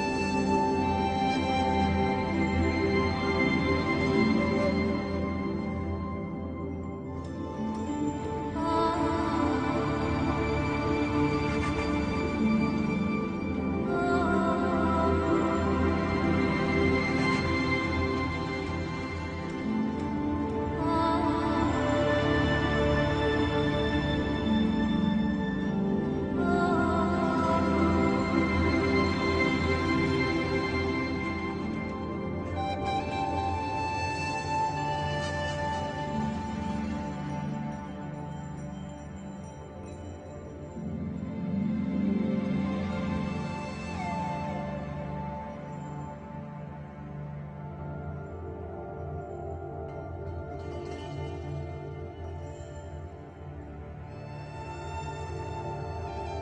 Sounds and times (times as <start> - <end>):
Music: 0.0 - 56.4.